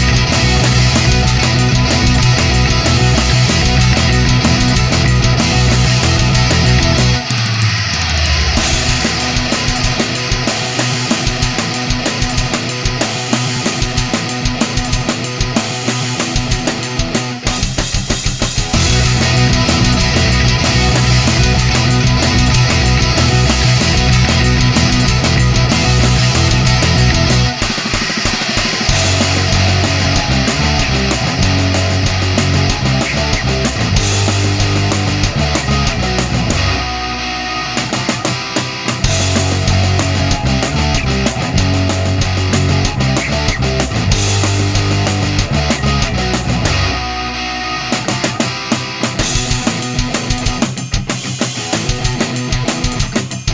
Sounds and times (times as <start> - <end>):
Music: 0.0 - 53.5.